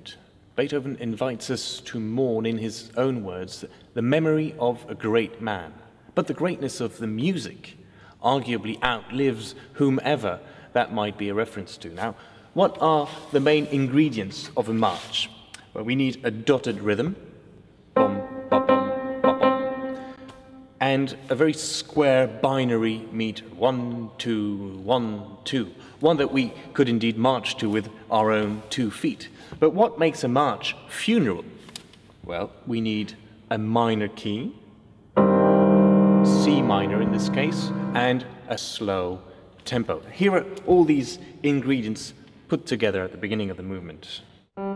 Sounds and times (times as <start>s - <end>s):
Speech: 0.0s - 17.3s, 20.8s - 31.6s, 32.2s - 34.6s, 36.3s - 44.3s
Music: 17.9s - 20.8s, 35.2s - 38.4s.